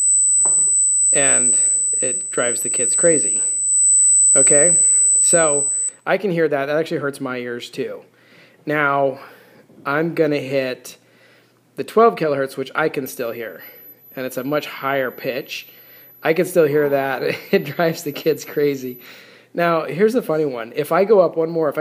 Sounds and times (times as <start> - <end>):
Speech: 1.2 - 3.5, 4.4 - 8.1, 8.7 - 11.0, 11.8 - 19.0, 19.6 - 21.8.